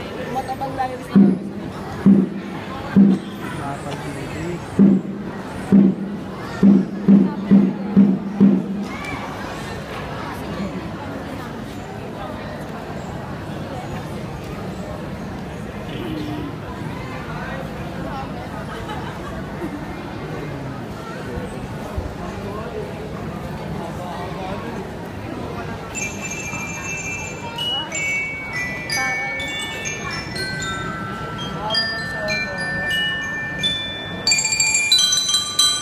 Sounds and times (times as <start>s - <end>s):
Speech: 0.0s - 34.5s.